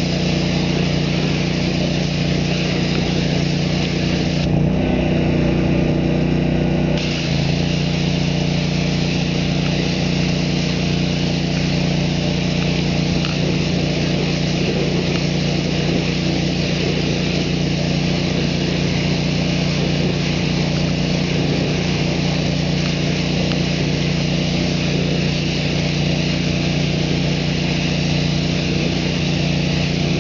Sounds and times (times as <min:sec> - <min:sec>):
Light engine (high frequency): 0:00.0 - 0:30.2.